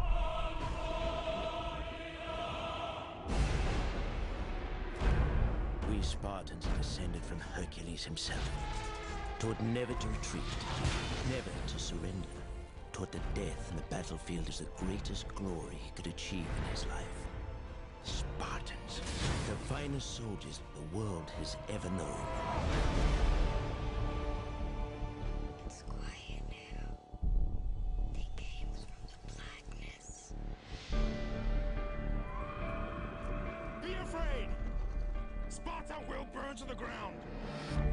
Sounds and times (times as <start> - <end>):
Music: 0.0 - 37.9
Speech: 5.8 - 8.6, 9.4 - 12.4, 13.0 - 17.2, 19.5 - 22.3.